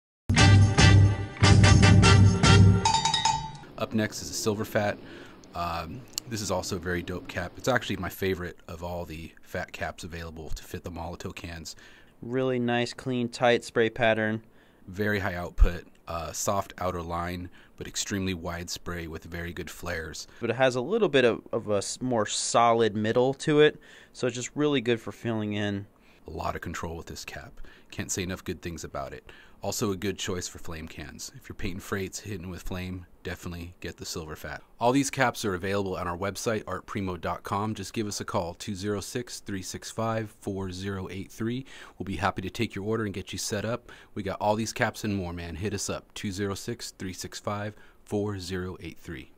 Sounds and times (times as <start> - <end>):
Speech: 3.8 - 49.3.